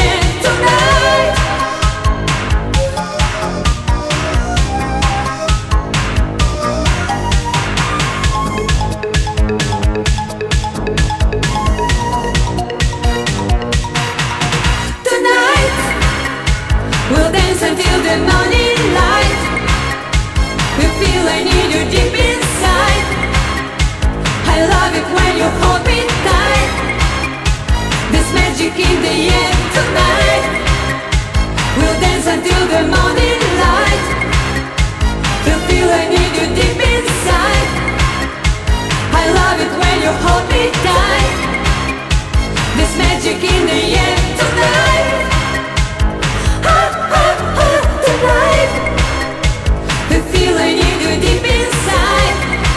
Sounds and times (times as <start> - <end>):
Disco: 0.0 - 52.7
Music of Asia: 0.0 - 52.7.